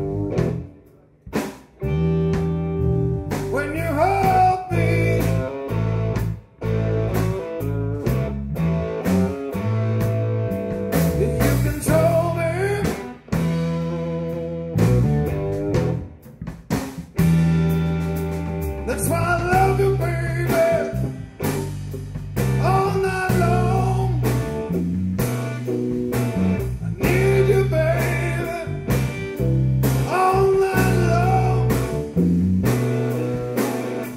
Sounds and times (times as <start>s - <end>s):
Psychedelic rock: 0.0s - 34.1s.